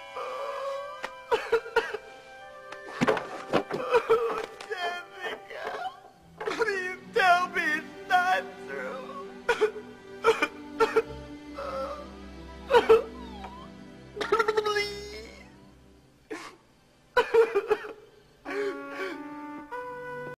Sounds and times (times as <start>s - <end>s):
Music: 0.0s - 16.3s, 17.3s - 20.3s.